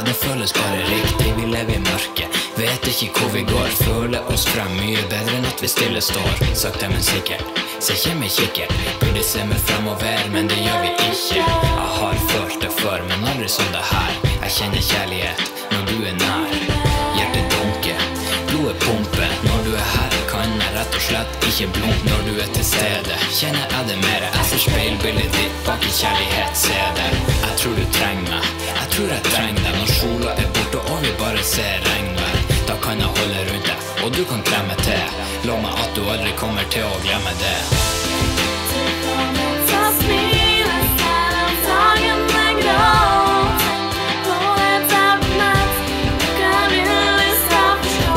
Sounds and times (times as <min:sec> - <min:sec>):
Music: 0:00.0 - 0:48.1.